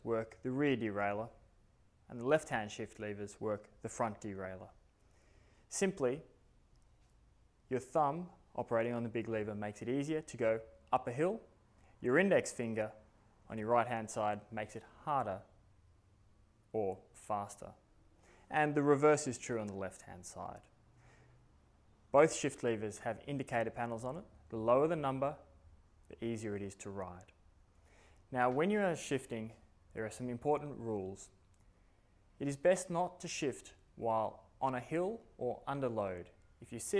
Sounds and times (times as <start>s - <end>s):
Speech: 0.0s - 1.4s, 2.1s - 4.8s, 5.7s - 6.4s, 7.7s - 15.5s, 16.7s - 17.8s, 18.5s - 20.7s, 22.1s - 25.5s, 26.1s - 27.4s, 28.3s - 31.4s, 32.4s - 37.0s.